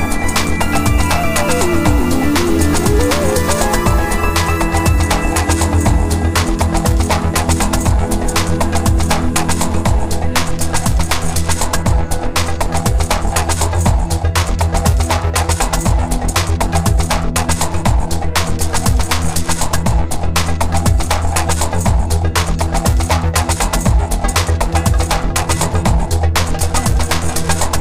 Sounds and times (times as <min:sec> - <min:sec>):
Drum and bass: 0:00.0 - 0:27.8.